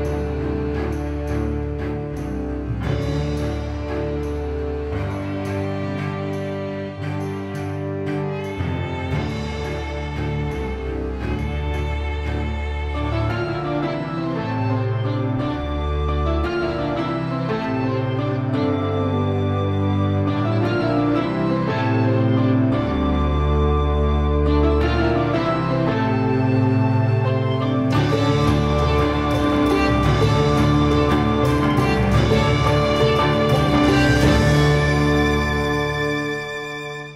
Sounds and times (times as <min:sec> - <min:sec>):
Music: 0:00.0 - 0:37.1.